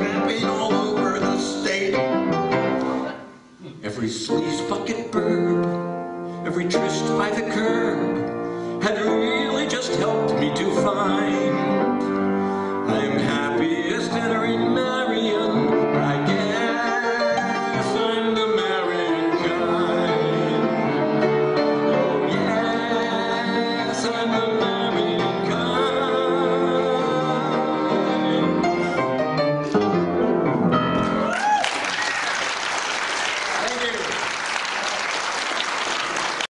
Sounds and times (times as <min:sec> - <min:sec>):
Classical music: 0:00.0 - 0:03.6, 0:04.2 - 0:31.4
Piano: 0:00.0 - 0:36.5
Speech: 0:33.6 - 0:34.2.